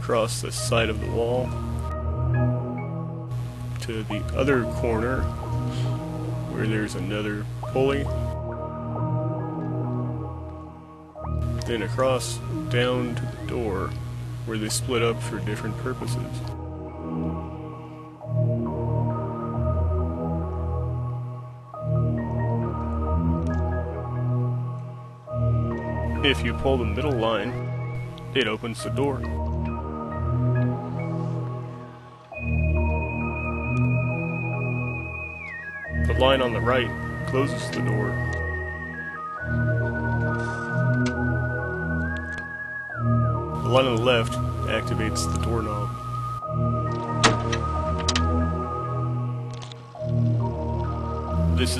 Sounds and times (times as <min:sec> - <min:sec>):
Speech: 0:00.0 - 0:01.6, 0:03.8 - 0:05.3, 0:06.5 - 0:08.2, 0:11.6 - 0:16.5, 0:26.2 - 0:27.6, 0:28.3 - 0:29.3, 0:36.0 - 0:38.2, 0:43.6 - 0:46.0, 0:51.6 - 0:51.7
Music: 0:00.0 - 0:51.7.